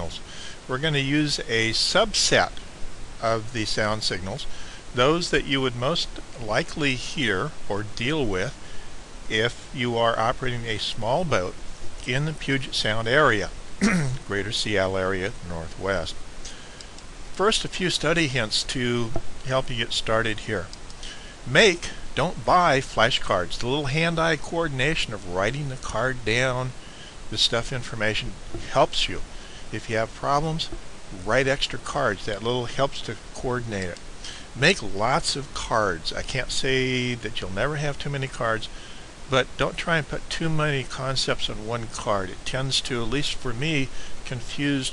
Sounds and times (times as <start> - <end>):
Speech: 0.0 - 2.6, 3.2 - 8.6, 9.3 - 16.2, 17.4 - 20.8, 21.4 - 34.0, 34.6 - 44.9.